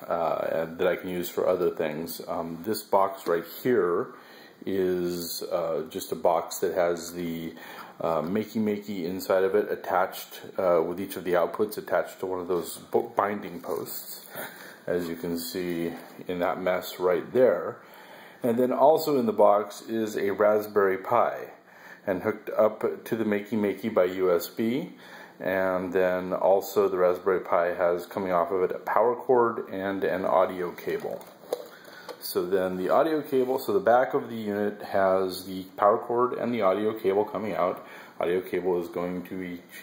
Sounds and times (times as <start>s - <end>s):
Speech: 0.0s - 17.8s, 18.4s - 31.4s, 32.2s - 39.8s.